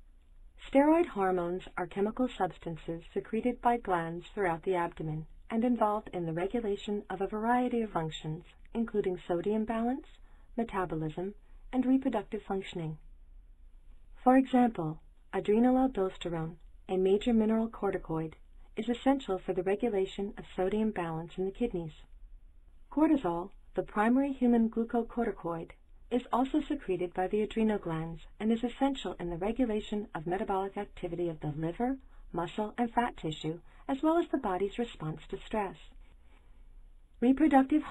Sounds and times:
Speech: 0.6 - 13.0, 14.2 - 22.1, 22.9 - 36.0, 37.2 - 37.9.

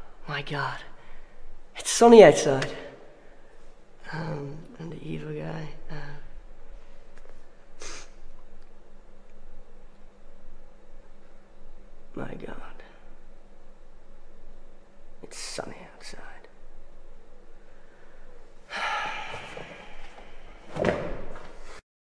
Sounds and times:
Speech: 1.8 - 3.0, 4.0 - 6.3, 12.1 - 13.0, 15.2 - 16.5.

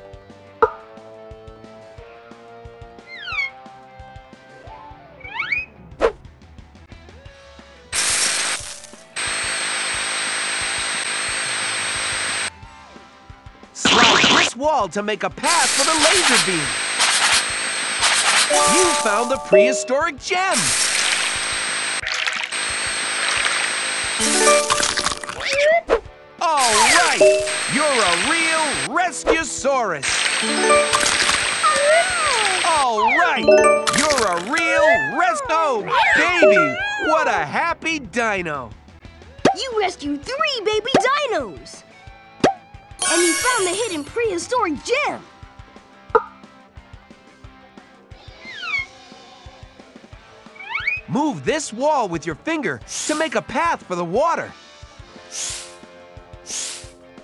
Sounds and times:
Music: 0.0 - 9.3, 12.5 - 16.6, 18.4 - 20.5, 24.0 - 57.2
Speech: 13.8 - 16.7, 18.6 - 20.7, 26.4 - 30.1, 31.9 - 38.8, 39.6 - 41.8, 43.0 - 45.3, 51.1 - 54.6.

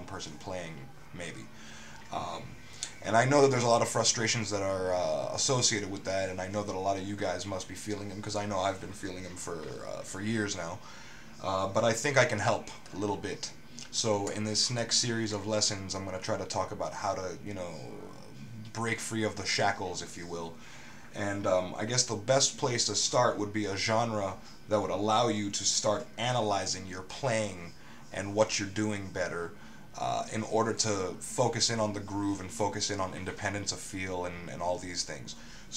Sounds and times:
Speech: 0.0 - 35.7.

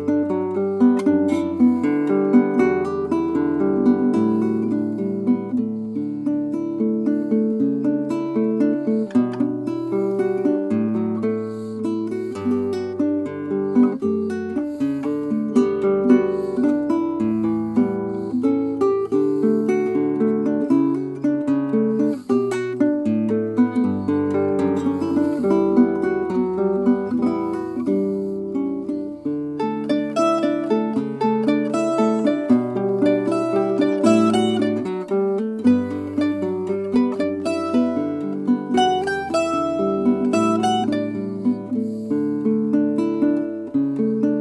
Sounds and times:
Acoustic guitar: 0.0 - 44.4.

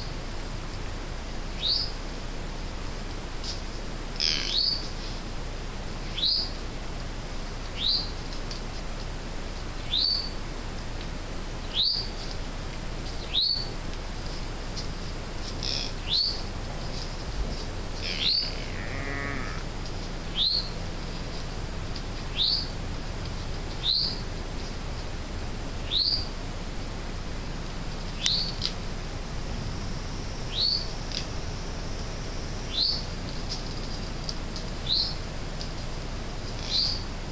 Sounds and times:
Outside, rural or natural: 0.0 - 37.3
Chirp, tweet: 1.6 - 1.9, 4.5 - 4.8, 6.2 - 6.5, 7.8 - 8.1, 9.9 - 10.3, 11.7 - 12.1, 13.2 - 13.7, 16.1 - 16.4, 20.4 - 20.7, 22.4 - 22.7, 23.8 - 24.2, 25.9 - 26.2, 28.2 - 28.6, 30.5 - 30.9, 32.7 - 33.1, 34.9 - 35.2, 36.6 - 37.0.

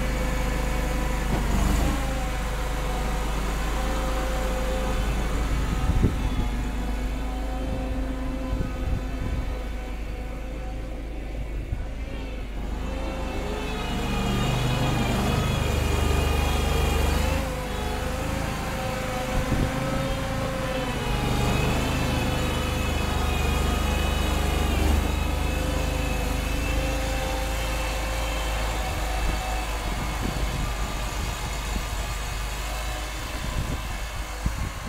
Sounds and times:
Vehicle: 0.0 - 34.8.

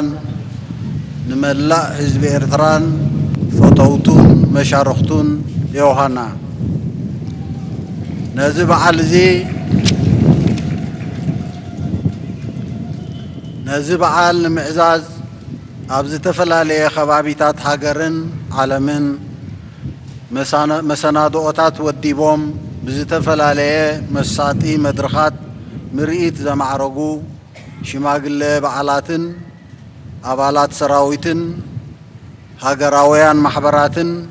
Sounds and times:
Male speech, man speaking: 0.0 - 0.3, 1.3 - 3.0, 3.6 - 6.4, 8.4 - 9.5, 13.7 - 15.2, 15.9 - 19.2, 20.4 - 25.4, 26.0 - 27.3, 27.9 - 29.5, 30.3 - 31.6, 32.6 - 34.3
Narration, monologue: 0.0 - 7.2, 8.3 - 10.2, 13.6 - 34.3.

